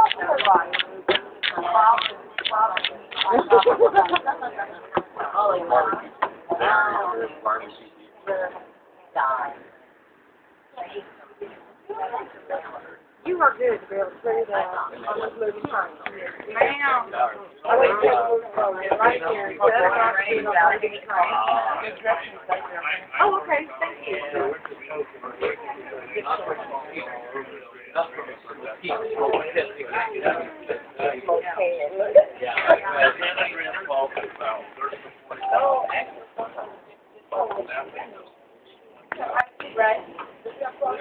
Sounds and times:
Speech: 0.0s - 9.8s, 10.7s - 41.0s.

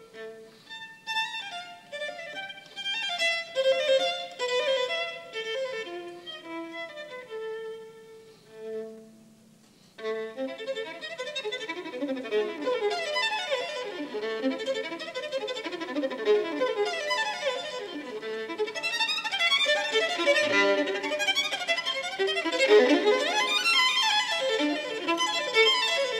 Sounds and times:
Violin, fiddle: 0.0s - 9.4s, 10.0s - 26.1s.

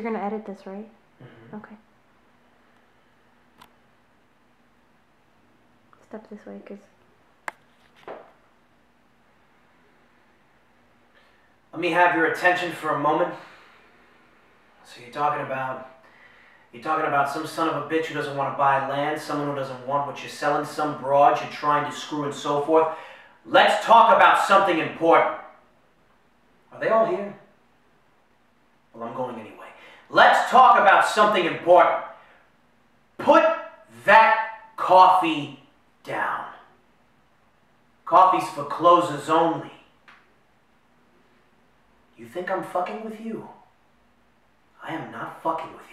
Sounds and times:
Narration, monologue: 0.0s - 45.9s
Male speech, man speaking: 11.8s - 13.5s, 14.8s - 16.0s, 16.8s - 25.5s, 26.8s - 27.5s, 29.0s - 32.1s, 33.2s - 36.7s, 38.1s - 39.9s, 42.2s - 43.7s, 44.8s - 45.9s.

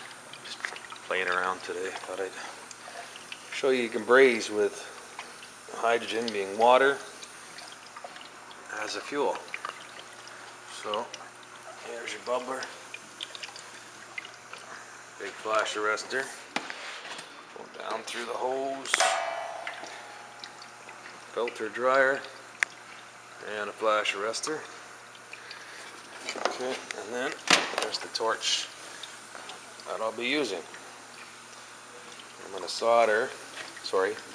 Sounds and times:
Liquid: 0.0s - 34.3s
Speech: 0.5s - 2.6s, 3.6s - 4.9s, 5.7s - 7.1s, 8.7s - 9.5s, 10.7s - 11.2s, 11.8s - 12.8s, 15.2s - 16.4s, 17.7s - 19.0s, 21.4s - 22.3s, 23.4s - 24.7s, 26.4s - 28.7s, 29.9s - 30.8s, 32.4s - 34.3s
Inside, small room: 10.7s - 22.8s.

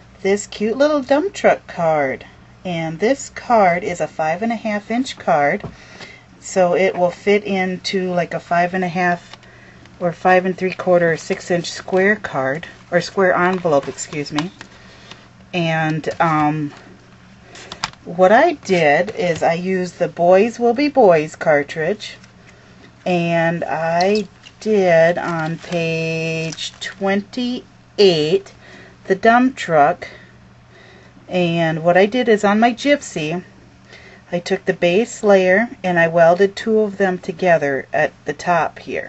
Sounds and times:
Speech: 0.2s - 5.7s, 6.4s - 9.4s, 10.0s - 14.5s, 15.6s - 16.8s, 18.1s - 22.2s, 23.1s - 28.5s, 29.1s - 30.1s, 31.3s - 33.5s, 34.3s - 39.0s.

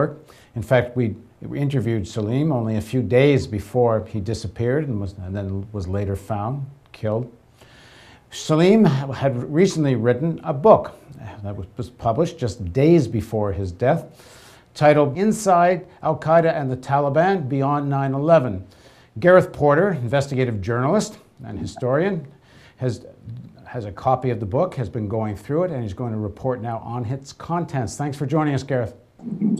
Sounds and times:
Speech: 0.0s - 7.4s, 8.3s - 14.2s, 14.8s - 29.5s.

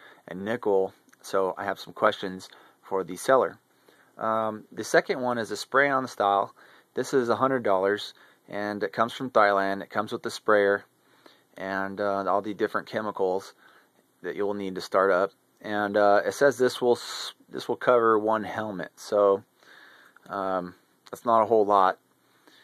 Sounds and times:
Speech: 0.2s - 3.6s, 4.2s - 10.9s, 11.6s - 13.6s, 14.2s - 19.5s, 20.2s - 22.0s.

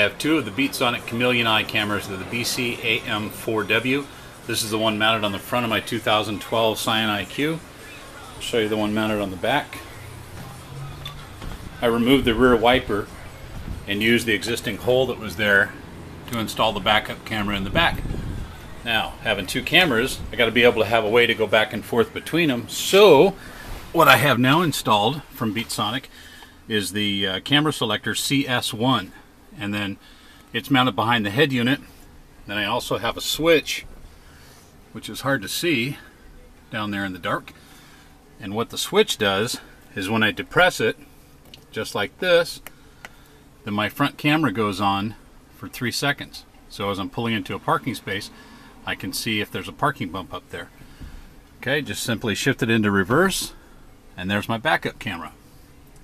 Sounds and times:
Speech: 0.0s - 11.1s, 11.8s - 26.1s, 26.7s - 31.9s, 32.5s - 33.9s, 34.9s - 36.1s, 36.7s - 37.5s, 38.4s - 41.0s, 41.7s - 42.7s, 43.6s - 50.7s, 51.6s - 53.6s, 54.2s - 55.4s.

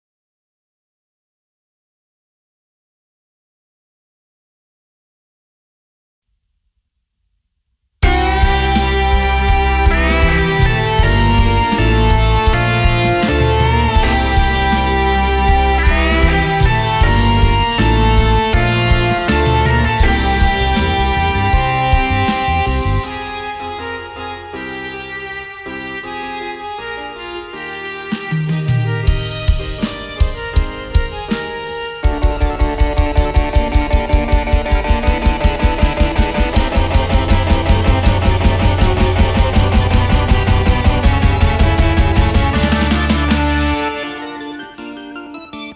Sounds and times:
Drum roll: 8.0s - 23.2s, 28.2s - 44.0s
Drum kit: 8.0s - 23.6s, 28.1s - 44.3s
Rimshot: 29.1s - 44.0s.

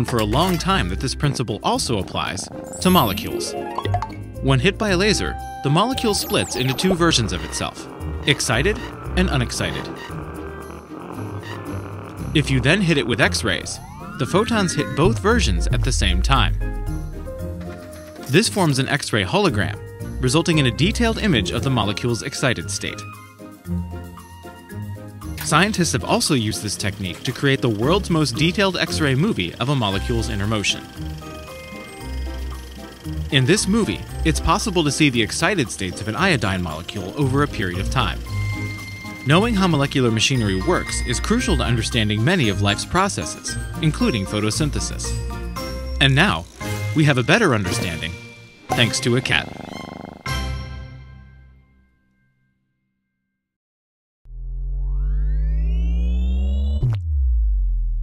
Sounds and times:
Speech: 0.0s - 3.6s, 4.4s - 9.9s, 12.4s - 16.6s, 18.3s - 23.1s, 25.4s - 30.9s, 33.3s - 38.2s, 39.3s - 45.2s, 46.0s - 49.5s
Music: 0.0s - 53.5s.

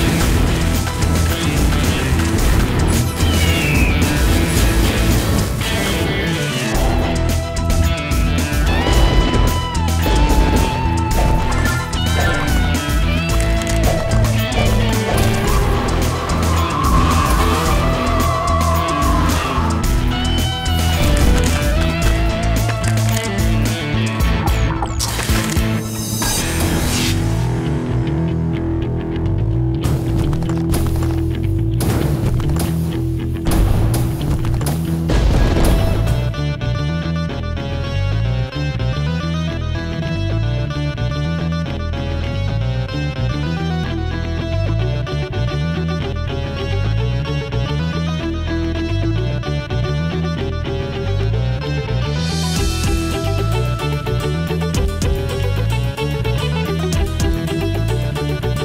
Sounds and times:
Music: 0.0s - 58.6s.

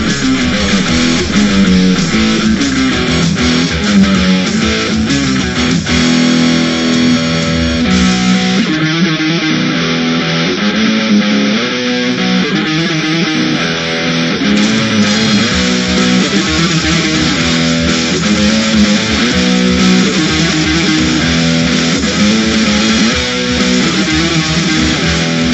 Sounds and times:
Electric guitar: 0.0s - 25.5s.

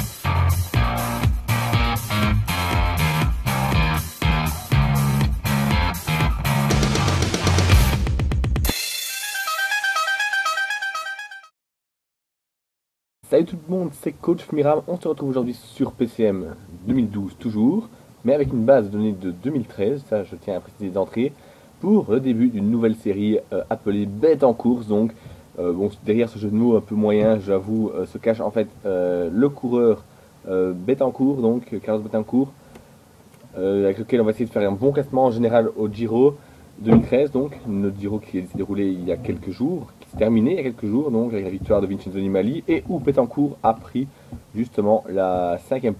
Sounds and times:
Speech: 13.2s - 32.6s, 33.5s - 45.9s.

